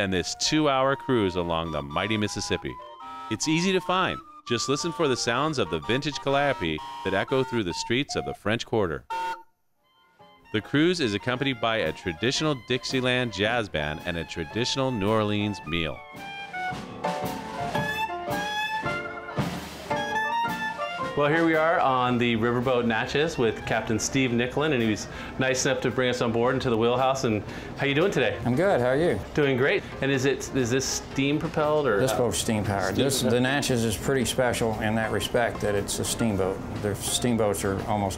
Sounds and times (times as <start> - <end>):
Speech: 0.0 - 9.0, 10.6 - 16.0, 21.2 - 38.1
Music: 0.0 - 38.1.